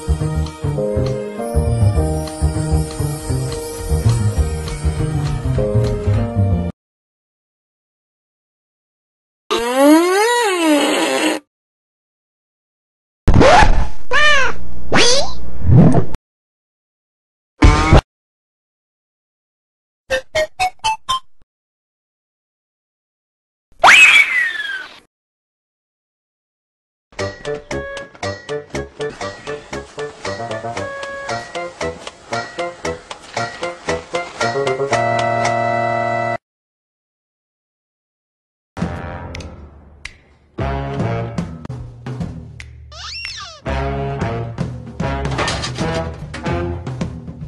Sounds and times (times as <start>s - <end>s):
Music: 0.0s - 6.8s, 27.2s - 36.4s, 38.8s - 43.0s, 43.6s - 47.4s
Sound effect: 13.3s - 16.2s, 17.6s - 18.0s.